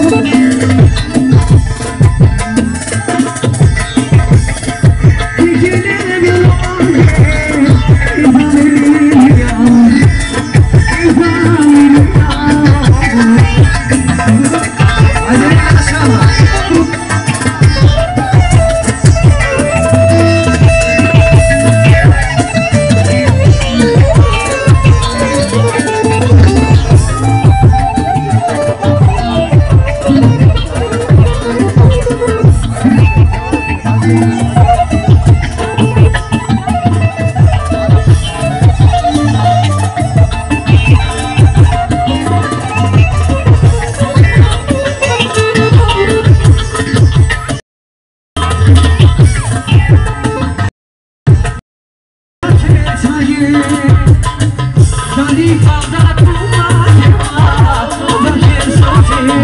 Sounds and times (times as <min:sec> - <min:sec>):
Music: 0:00.0 - 0:47.6, 0:48.4 - 0:50.7, 0:51.3 - 0:51.6, 0:52.4 - 0:59.4.